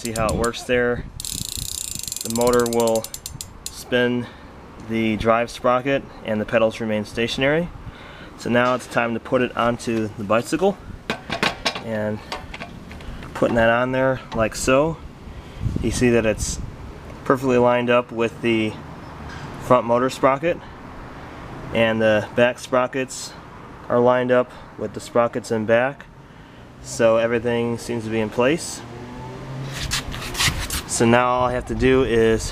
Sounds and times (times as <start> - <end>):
Speech: 0.0 - 1.1, 2.2 - 3.1, 3.8 - 7.7, 8.4 - 10.8, 11.8 - 12.3, 13.4 - 15.0, 15.8 - 16.6, 17.3 - 18.8, 19.6 - 20.6, 21.8 - 26.1, 26.8 - 28.8, 30.9 - 32.5.